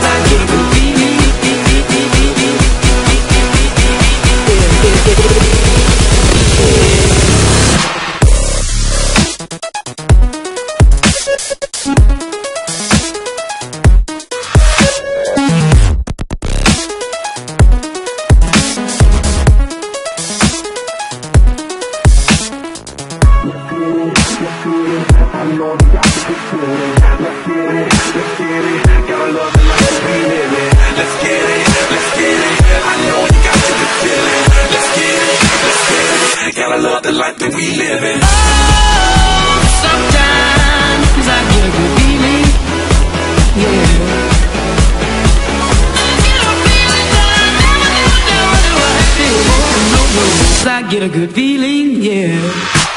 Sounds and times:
Techno: 0.0 - 36.6, 38.0 - 51.1
Electronica: 0.0 - 36.7, 37.5 - 50.8.

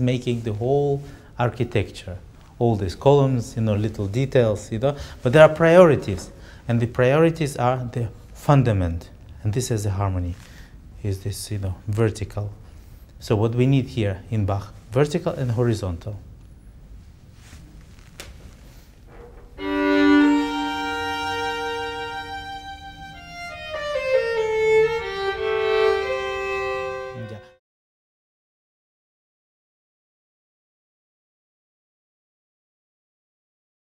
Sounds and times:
Speech: 0.0 - 10.4, 11.0 - 12.6, 13.2 - 16.2, 27.2 - 27.6
Classical music: 19.6 - 27.6
Violin, fiddle: 19.6 - 27.6.

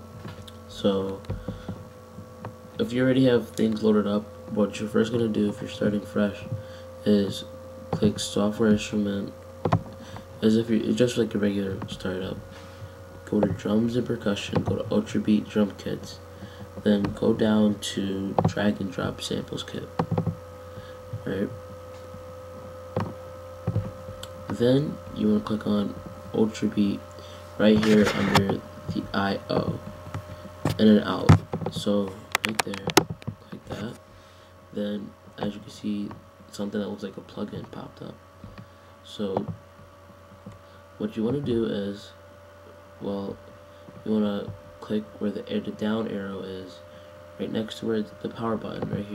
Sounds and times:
Speech: 0.6 - 1.3, 2.8 - 9.4, 10.4 - 12.4, 13.2 - 16.2, 16.8 - 19.9, 21.2 - 21.6, 24.4 - 27.0, 27.6 - 29.9, 30.7 - 34.0, 34.7 - 38.2, 39.0 - 39.6, 41.0 - 42.2, 43.0 - 43.4, 44.0 - 49.1.

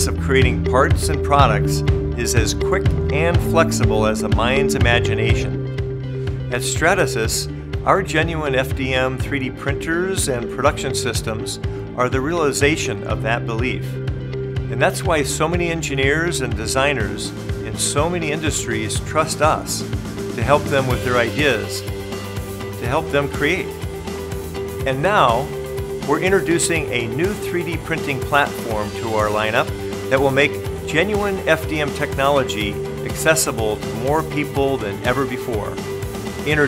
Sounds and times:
Speech: 0.0 - 5.6, 6.5 - 14.0, 14.7 - 21.8, 22.8 - 23.7, 24.9 - 25.5, 26.1 - 35.8, 36.5 - 36.6
Music: 0.0 - 36.6.

